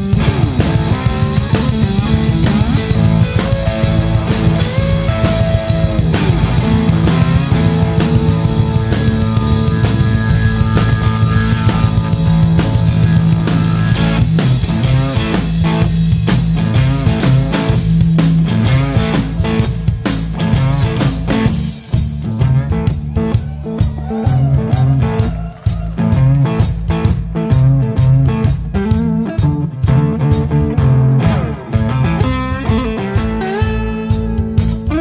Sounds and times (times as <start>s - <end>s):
Guitar: 0.0s - 35.0s.